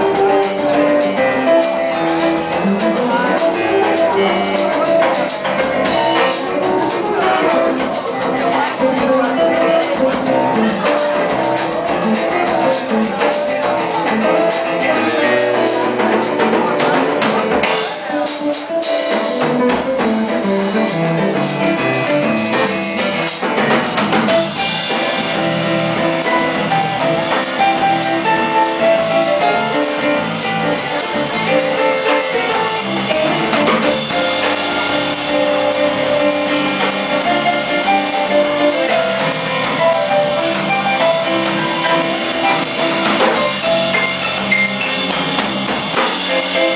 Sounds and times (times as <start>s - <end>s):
Blues: 0.0s - 46.7s.